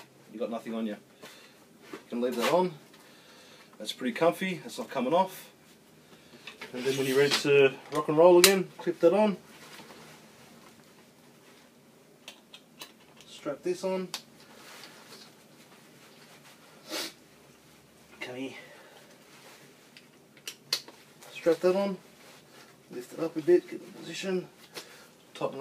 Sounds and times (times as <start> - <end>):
Inside, small room: 0.0 - 25.6
Speech: 0.3 - 1.0, 2.1 - 2.8, 3.8 - 5.6, 6.7 - 9.4, 13.3 - 14.2, 18.2 - 18.7, 21.3 - 22.0, 22.9 - 24.5, 25.4 - 25.6.